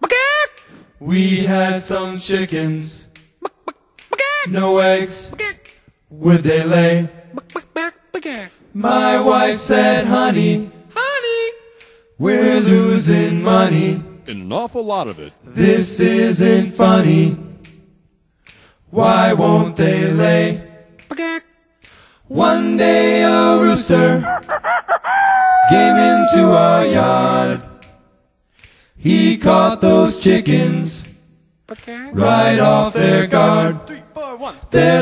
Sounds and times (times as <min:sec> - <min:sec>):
Speech: 0:08.2 - 0:08.6, 0:11.0 - 0:11.6, 0:14.3 - 0:15.6, 0:31.7 - 0:32.2, 0:33.9 - 0:34.6
Domestic animals, pets: 0:24.2 - 0:27.1
Crowing, cock-a-doodle-doo: 0:24.2 - 0:27.4.